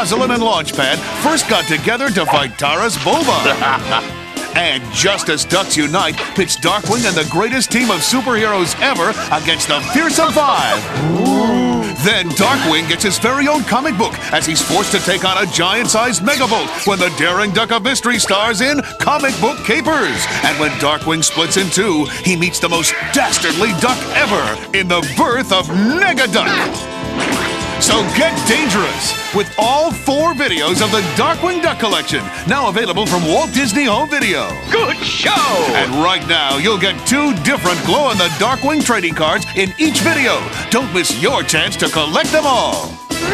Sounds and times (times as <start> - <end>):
Speech: 0.0 - 26.8, 27.8 - 43.3
Music: 0.0 - 43.3.